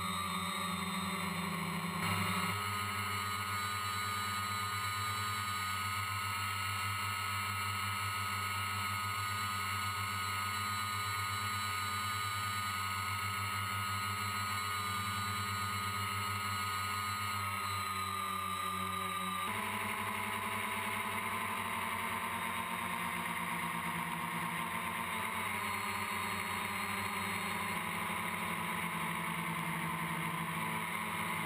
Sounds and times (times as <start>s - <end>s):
Motorboat, speedboat: 0.0s - 31.4s.